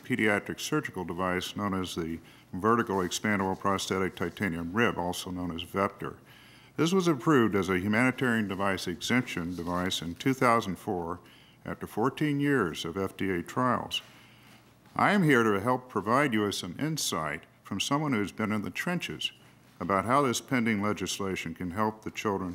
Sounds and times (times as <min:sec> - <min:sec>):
Speech: 0:00.0 - 0:06.2, 0:06.8 - 0:14.1, 0:15.0 - 0:22.5.